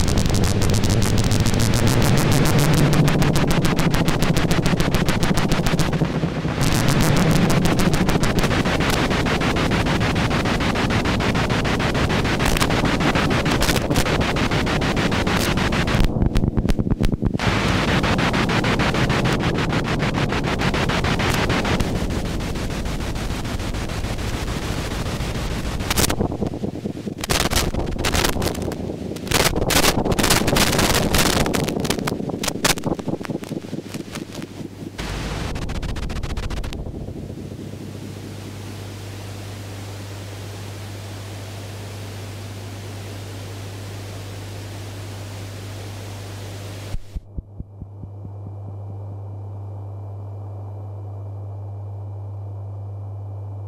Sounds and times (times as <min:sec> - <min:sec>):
Pink noise: 0:00.0 - 0:50.0
White noise: 0:00.0 - 0:53.6.